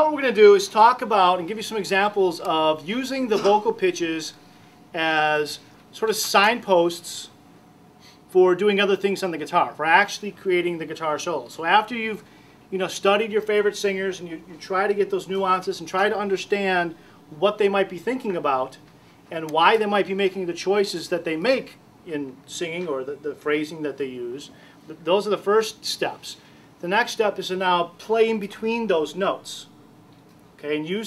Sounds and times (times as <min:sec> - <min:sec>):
Speech: 0:00.0 - 0:04.4, 0:05.0 - 0:07.4, 0:08.3 - 0:29.7, 0:30.6 - 0:31.0.